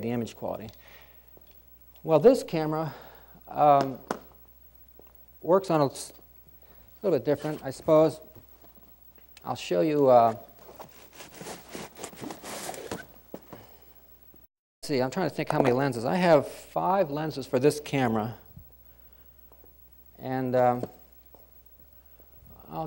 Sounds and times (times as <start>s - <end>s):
Speech: 0.0s - 0.7s, 2.0s - 4.0s, 5.4s - 6.2s, 7.0s - 8.3s, 9.4s - 10.5s, 14.8s - 18.5s, 20.2s - 21.0s, 22.6s - 22.8s.